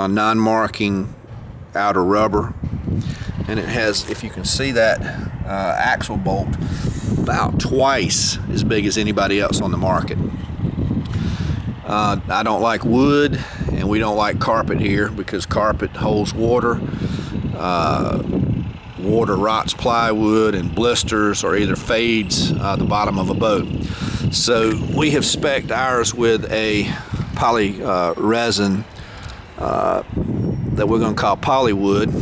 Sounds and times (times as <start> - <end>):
Speech: 0.0 - 1.2, 1.8 - 2.6, 3.5 - 6.6, 7.2 - 10.2, 11.8 - 16.8, 17.6 - 18.3, 19.0 - 28.9, 29.6 - 30.1, 30.8 - 32.1
Vehicle: 0.0 - 32.2.